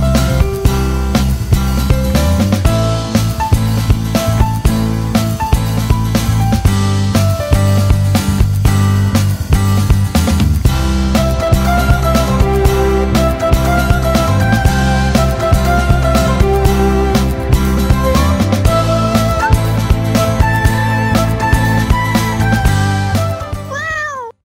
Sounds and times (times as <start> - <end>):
Music: 0.0 - 24.4
Meow: 23.7 - 24.4.